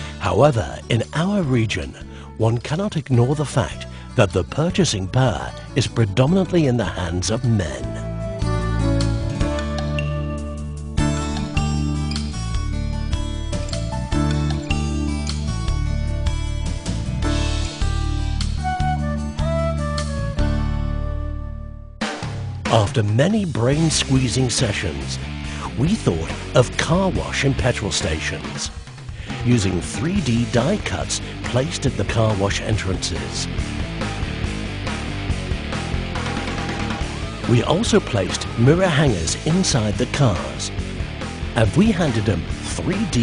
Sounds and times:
Music: 0:00.0 - 0:43.2.

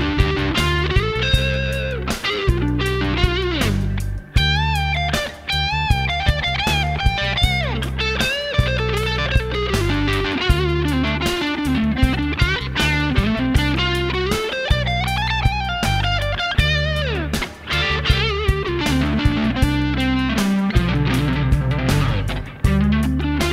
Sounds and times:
Electric guitar: 0:00.0 - 0:23.5.

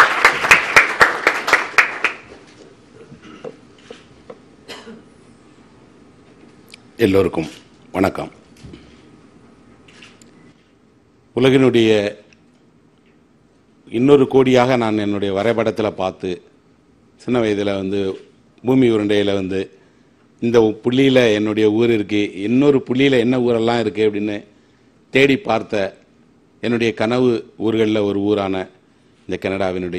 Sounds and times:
Narration, monologue: 0:02.4 - 0:29.9
Male speech, man speaking: 0:07.0 - 0:08.4, 0:11.4 - 0:12.3, 0:13.9 - 0:16.5, 0:17.2 - 0:19.7, 0:20.4 - 0:24.5, 0:25.2 - 0:26.0, 0:26.6 - 0:29.9.

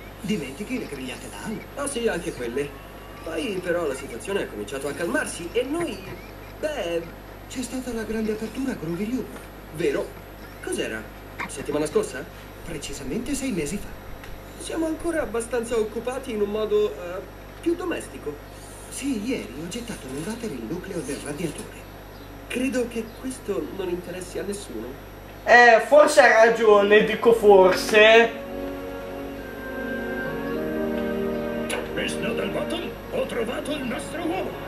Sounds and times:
Speech: 0:00.2 - 0:13.9, 0:14.6 - 0:21.8, 0:22.5 - 0:28.4, 0:31.7 - 0:34.6.

